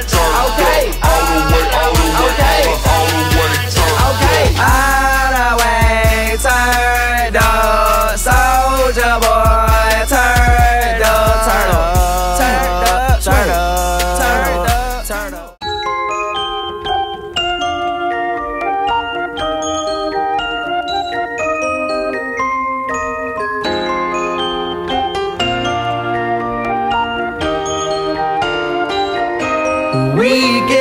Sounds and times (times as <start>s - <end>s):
Glockenspiel: 15.6s - 30.8s.